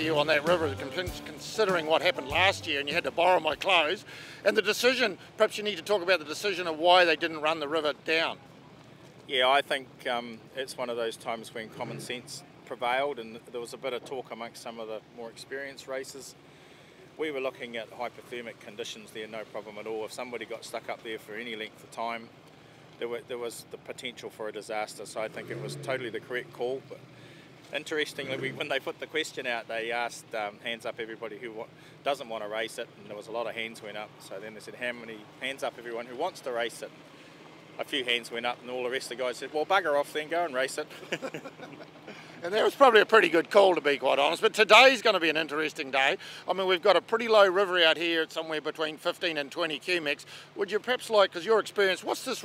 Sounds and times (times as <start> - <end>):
Speech: 0.0 - 8.5, 9.3 - 16.4, 17.2 - 22.3, 23.0 - 27.0, 27.7 - 36.9, 37.8 - 41.4, 42.4 - 52.4
Vehicle: 0.0 - 52.4.